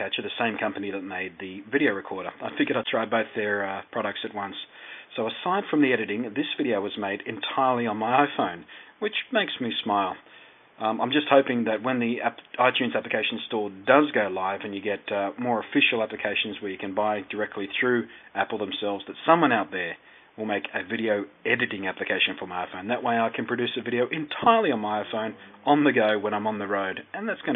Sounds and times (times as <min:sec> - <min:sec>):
Speech: 0:00.0 - 0:10.2, 0:10.8 - 0:27.5.